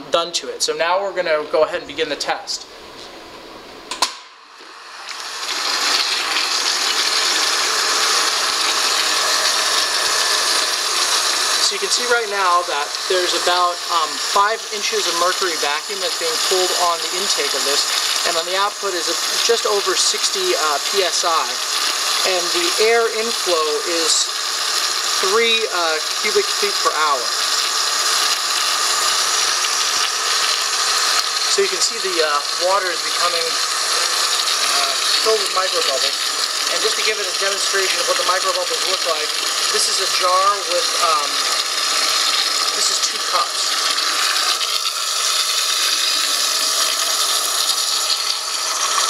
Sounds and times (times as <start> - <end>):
Speech: 0.0 - 2.7, 11.6 - 21.6, 22.2 - 24.3, 25.2 - 27.3, 31.5 - 33.6, 34.7 - 41.4, 42.7 - 43.8
Pump (liquid): 3.9 - 49.0
Water: 4.6 - 49.0.